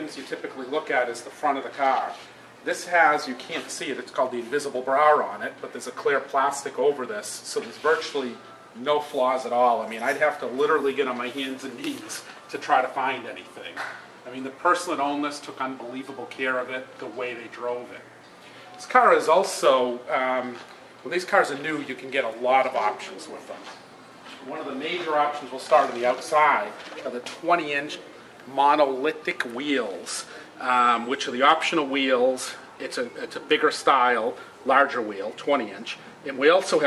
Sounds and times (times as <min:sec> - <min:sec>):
Speech: 0:00.0 - 0:18.1, 0:18.8 - 0:23.8, 0:24.4 - 0:36.8.